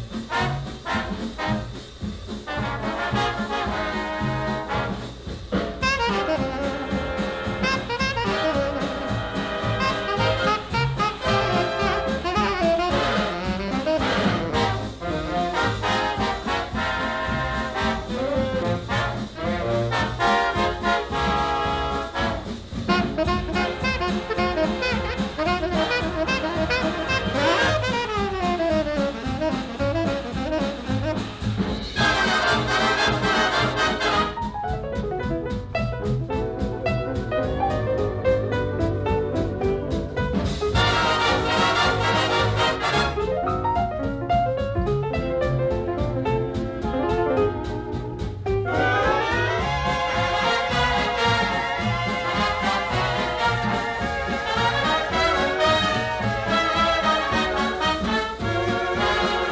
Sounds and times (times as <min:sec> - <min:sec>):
Trombone: 0:00.0 - 0:59.5.